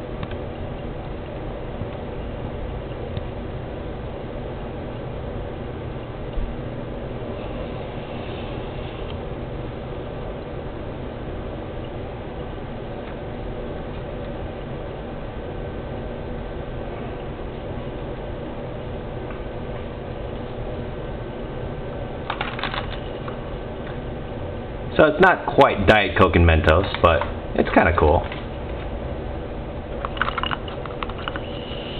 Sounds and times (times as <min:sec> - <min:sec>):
Speech: 0:25.0 - 0:28.4.